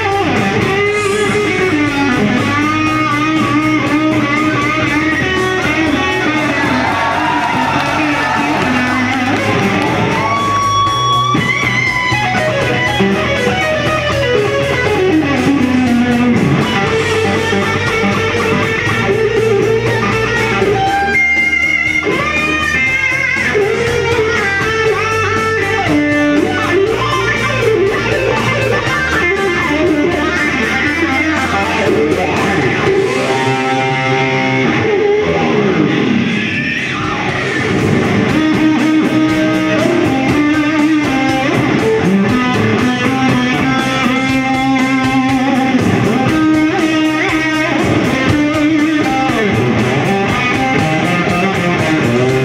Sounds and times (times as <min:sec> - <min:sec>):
Electric guitar: 0:00.0 - 0:52.4.